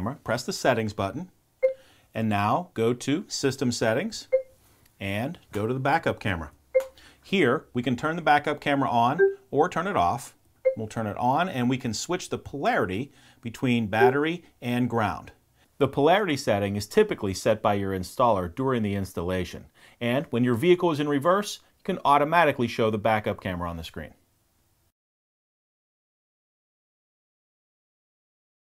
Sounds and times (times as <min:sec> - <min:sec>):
Speech: 0:00.0 - 0:01.3, 0:02.2 - 0:04.4, 0:05.0 - 0:06.6, 0:07.3 - 0:24.2.